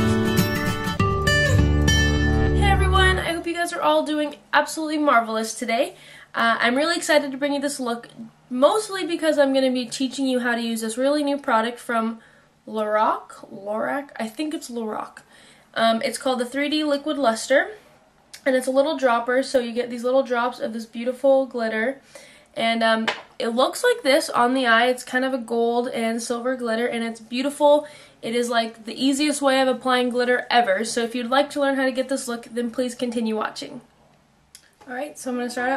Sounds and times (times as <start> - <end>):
Speech: 2.6 - 15.2, 15.8 - 17.8, 18.4 - 22.0, 22.6 - 33.9, 34.8 - 35.7.